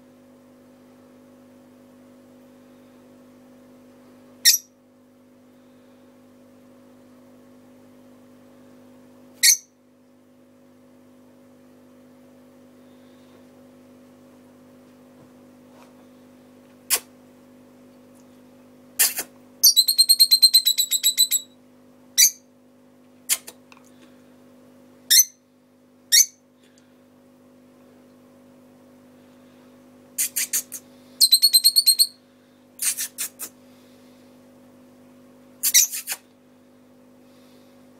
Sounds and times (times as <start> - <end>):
Chirp, tweet: 19.6 - 21.5.